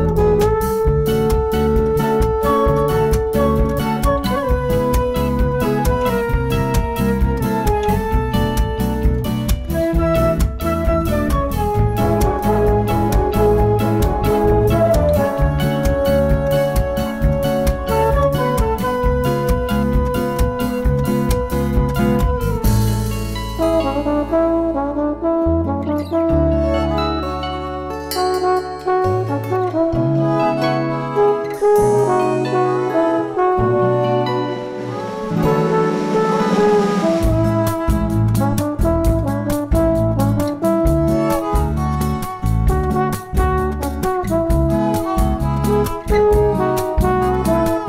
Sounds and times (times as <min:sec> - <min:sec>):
Blues: 0:00.0 - 0:47.8.